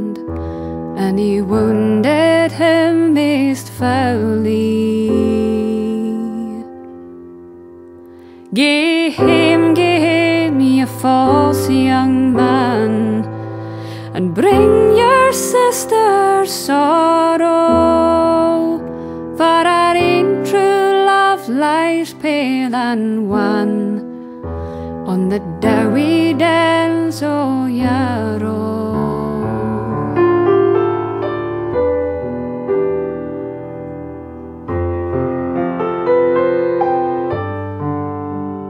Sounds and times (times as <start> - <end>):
Piano: 0.0 - 38.6.